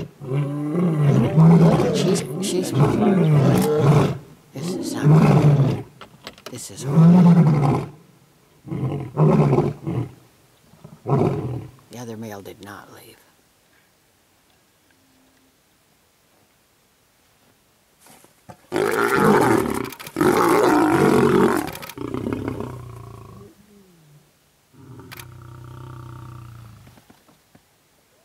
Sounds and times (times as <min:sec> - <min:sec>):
Roaring cats (lions, tigers): 0:00.0 - 0:05.9, 0:18.7 - 0:23.9
Speech: 0:01.0 - 0:03.7, 0:04.6 - 0:05.4, 0:06.5 - 0:07.0, 0:11.9 - 0:13.4.